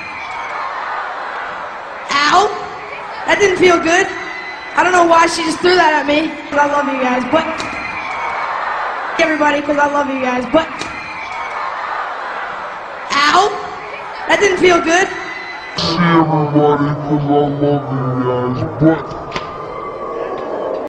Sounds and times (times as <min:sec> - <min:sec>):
Speech: 0:15.8 - 0:19.1.